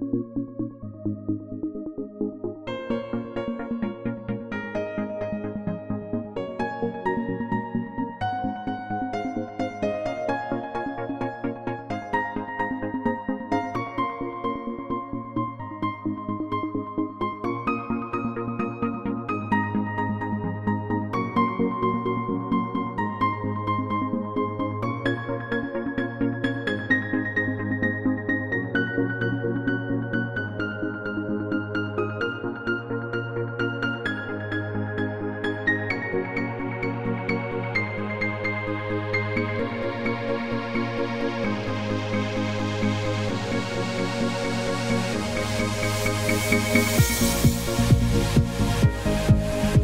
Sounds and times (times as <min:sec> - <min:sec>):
Electronic music: 0:00.0 - 0:49.8.